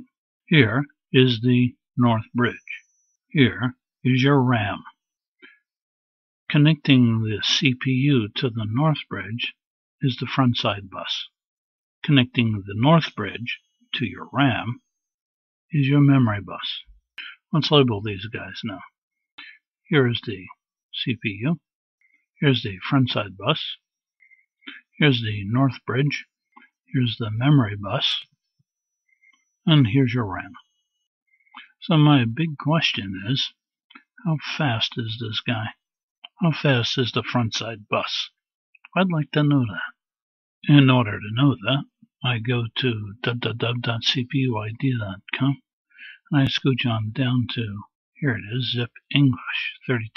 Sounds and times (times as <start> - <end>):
Speech: 0.0 - 5.0, 6.5 - 11.4, 12.0 - 14.8, 15.7 - 21.7, 22.4 - 23.9, 24.7 - 28.3, 29.7 - 30.6, 31.6 - 50.1.